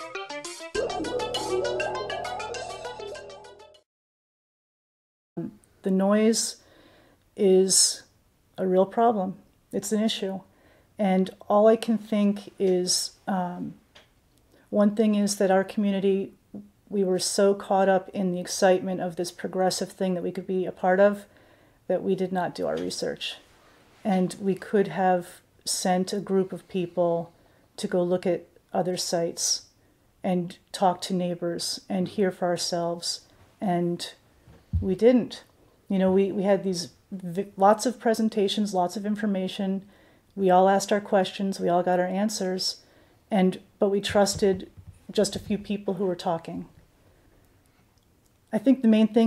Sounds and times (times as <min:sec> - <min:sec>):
Speech: 0:05.4 - 0:06.6, 0:07.4 - 0:13.8, 0:14.7 - 0:21.3, 0:21.9 - 0:34.2, 0:34.8 - 0:39.8, 0:40.4 - 0:46.7, 0:48.5 - 0:49.2.